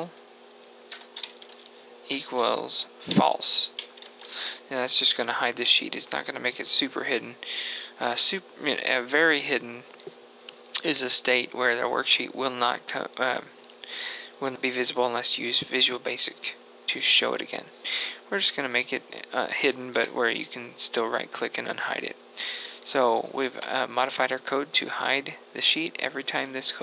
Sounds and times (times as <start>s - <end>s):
Speech: 2.1s - 3.8s, 4.6s - 9.9s, 10.8s - 13.6s, 14.3s - 22.2s, 22.8s - 26.8s.